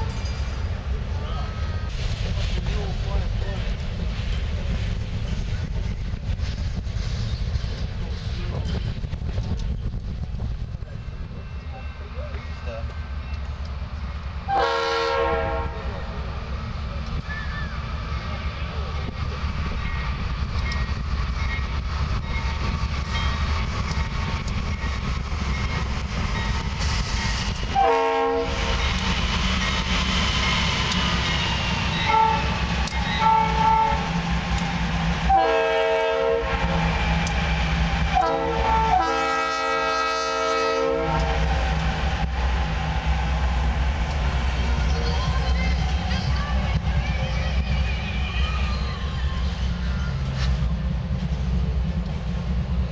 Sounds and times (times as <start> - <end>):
Railroad car, train wagon: 0.0 - 52.9
Train horn: 14.5 - 16.0, 27.7 - 28.8, 32.0 - 34.1, 35.3 - 36.8, 38.1 - 41.6.